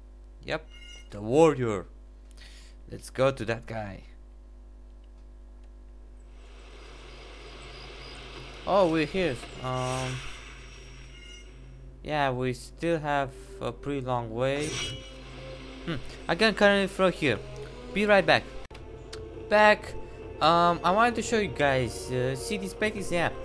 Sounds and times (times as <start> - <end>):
Speech: 0.4 - 1.9, 2.9 - 4.2, 8.7 - 10.2, 12.1 - 14.8, 16.3 - 17.4, 18.0 - 18.5, 19.5 - 23.4.